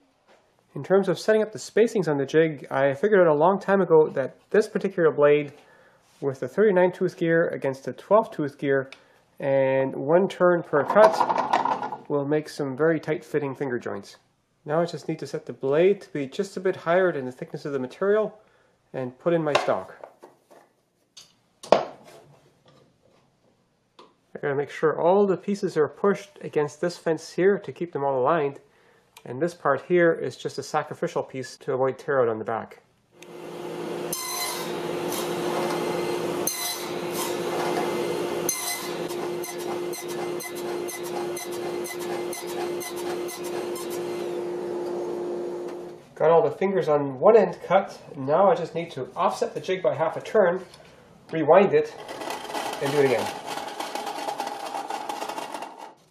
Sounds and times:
Speech: 0.8s - 5.6s, 6.2s - 11.3s, 12.1s - 20.0s, 24.3s - 28.6s, 29.2s - 32.8s, 46.2s - 50.7s, 51.3s - 52.0s, 52.8s - 53.4s
Wood: 10.8s - 12.0s, 34.2s - 44.3s, 52.0s - 56.1s.

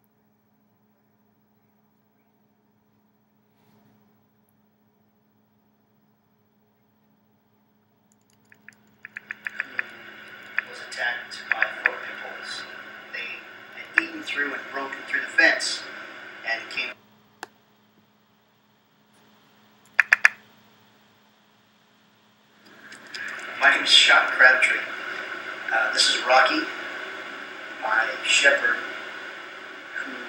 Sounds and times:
Speech: 10.6s - 17.0s, 23.2s - 26.8s, 27.8s - 28.9s, 29.9s - 30.2s.

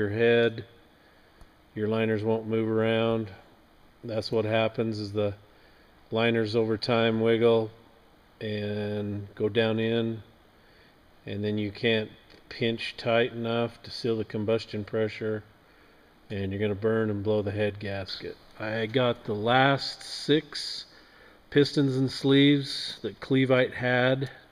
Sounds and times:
Speech: 0.0s - 0.7s, 1.8s - 5.4s, 6.1s - 7.8s, 8.4s - 10.3s, 11.2s - 15.5s, 16.3s - 20.9s, 21.5s - 24.5s.

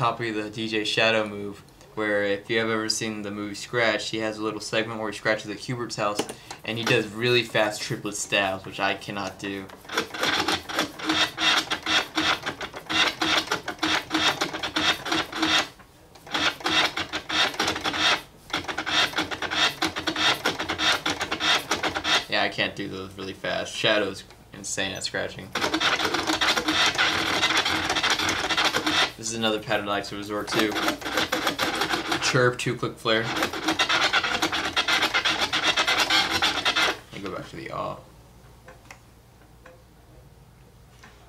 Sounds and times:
Scratching (performance technique): 4.3s - 37.5s.

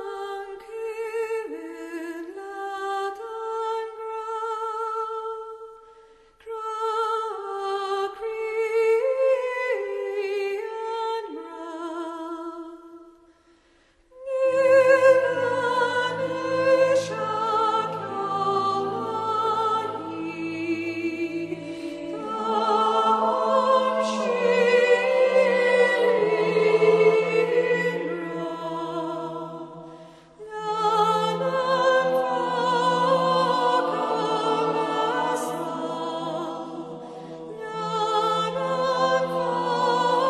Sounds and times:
Music: 0.0s - 40.2s.

